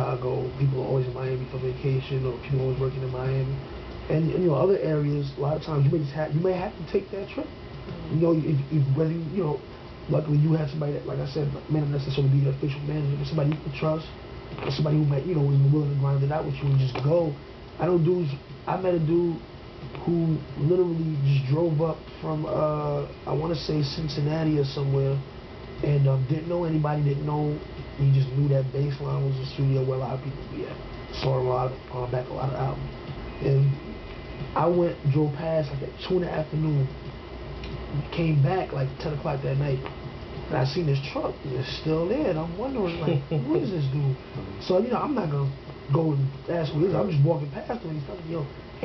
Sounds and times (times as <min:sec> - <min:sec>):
Speech: 0:00.0 - 0:19.4, 0:20.0 - 0:33.9, 0:34.5 - 0:37.0, 0:37.9 - 0:48.8.